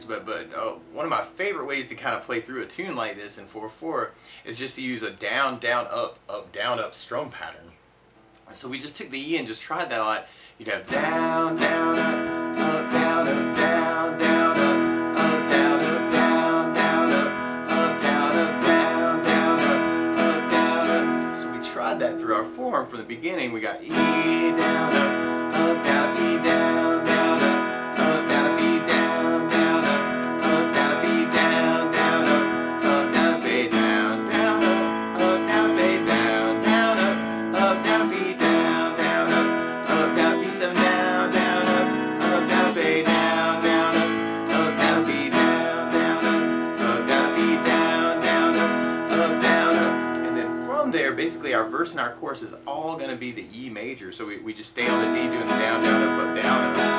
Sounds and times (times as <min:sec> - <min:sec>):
Speech: 0:00.0 - 0:07.8, 0:08.4 - 0:11.0, 0:21.4 - 0:24.1, 0:50.2 - 0:56.6
Strum: 0:10.9 - 0:22.9, 0:23.8 - 0:52.2.